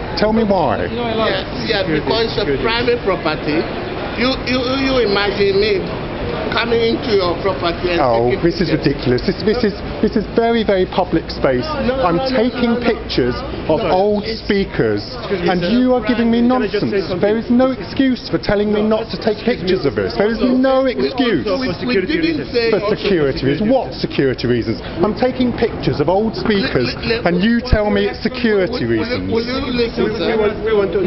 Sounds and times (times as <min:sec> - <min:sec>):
Speech: 0:00.1 - 0:31.0.